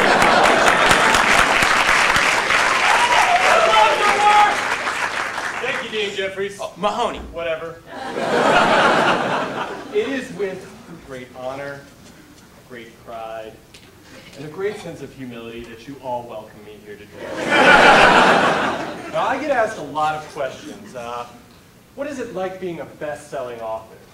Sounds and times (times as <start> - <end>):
Narration, monologue: 5.4 - 8.0, 9.5 - 18.0, 18.9 - 24.1
Male speech, man speaking: 5.6 - 7.8, 9.9 - 11.9, 12.7 - 13.6, 14.4 - 17.2, 19.1 - 21.4, 22.0 - 24.1.